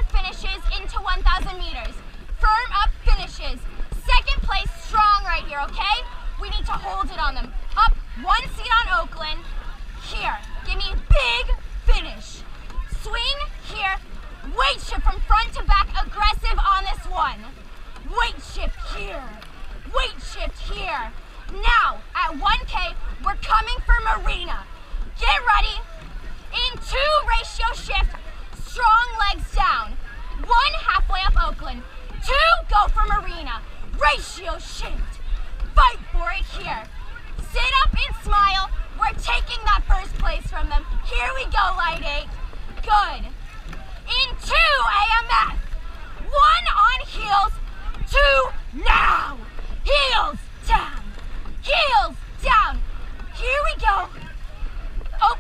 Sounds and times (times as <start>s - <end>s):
Speech: 0.0s - 9.4s, 10.0s - 17.5s, 18.1s - 25.9s, 26.5s - 43.4s, 44.1s - 52.8s, 53.4s - 54.4s, 55.2s - 55.4s
Rowboat, canoe, kayak: 0.0s - 55.4s.